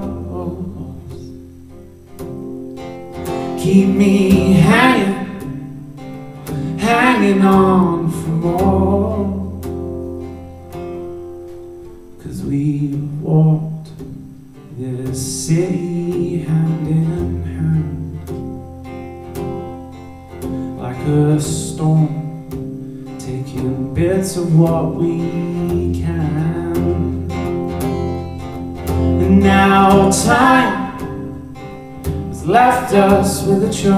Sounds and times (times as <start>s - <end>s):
Independent music: 0.0s - 33.9s.